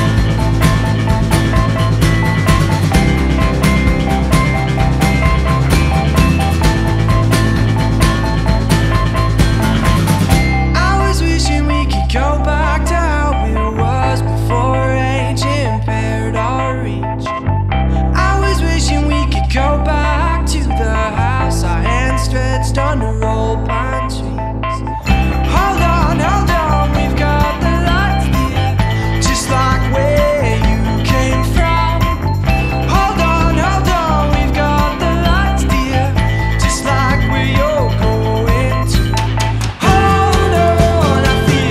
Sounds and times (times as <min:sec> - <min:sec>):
Music: 0:00.0 - 0:41.7.